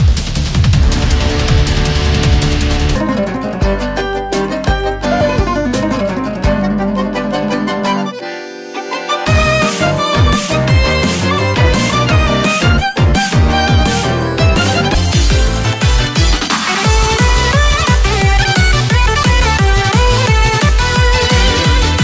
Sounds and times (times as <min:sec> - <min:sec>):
Music: 0:00.0 - 0:22.0.